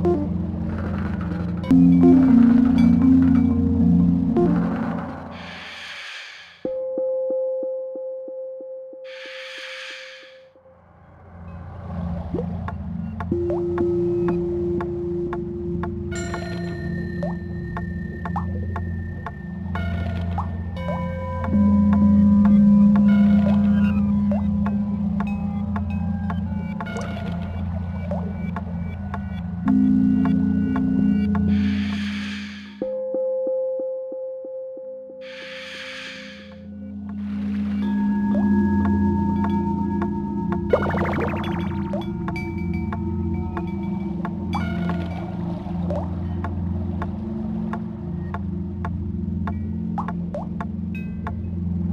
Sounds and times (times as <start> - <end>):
Music: 0.0 - 51.9.